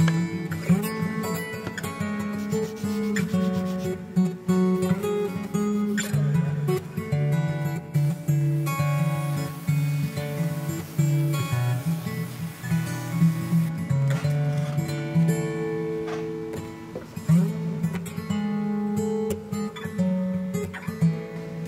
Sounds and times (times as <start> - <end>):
Acoustic guitar: 0.0 - 21.6.